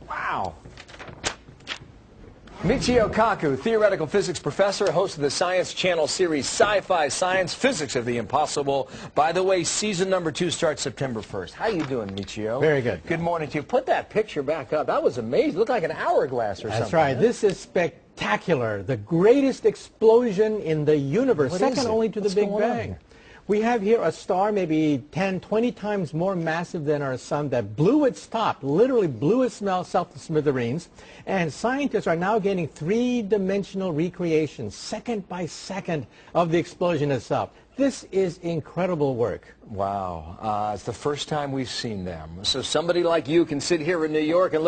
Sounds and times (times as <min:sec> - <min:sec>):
Speech: 0:02.6 - 0:44.6.